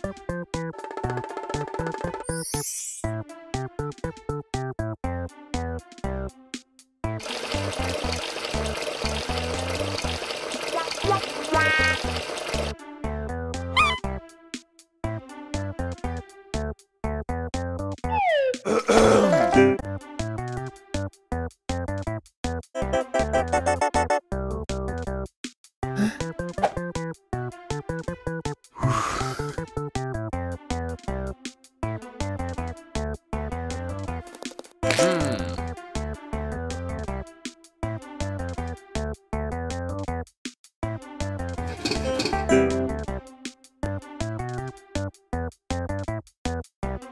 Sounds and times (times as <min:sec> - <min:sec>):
Water: 0:07.2 - 0:12.8.